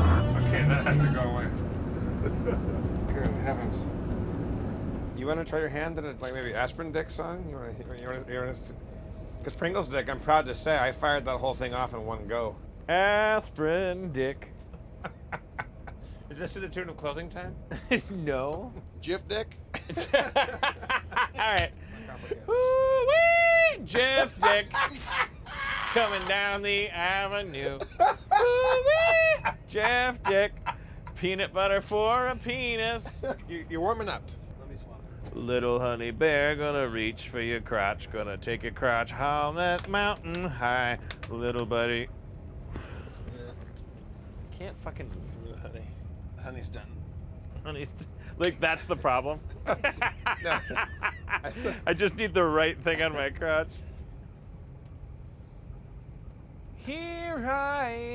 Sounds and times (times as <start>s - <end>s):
Speech: 5.2s - 8.8s, 9.5s - 14.5s, 16.3s - 19.5s, 23.8s - 24.8s, 26.0s - 27.9s, 31.2s - 42.1s, 47.7s - 49.4s, 51.5s - 53.8s.